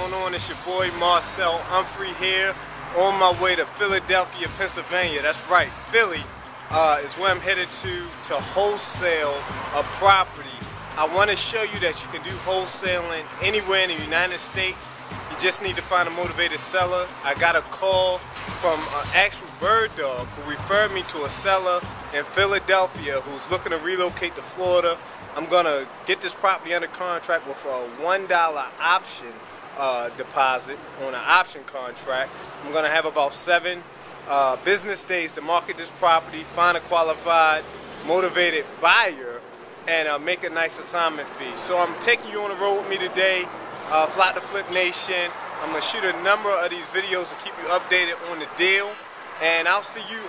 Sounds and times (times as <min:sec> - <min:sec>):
Music: 0:00.0 - 0:27.0
Speech: 0:00.0 - 0:50.2.